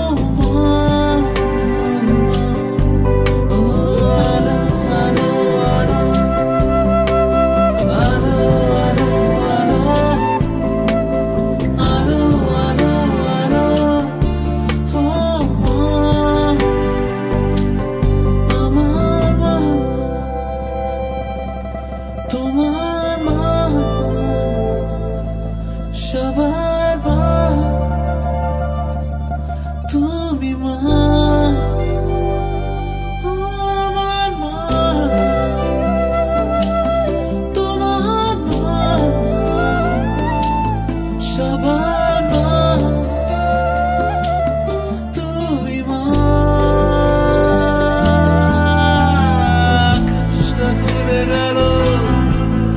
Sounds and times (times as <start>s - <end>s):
Music: 0.0s - 52.7s.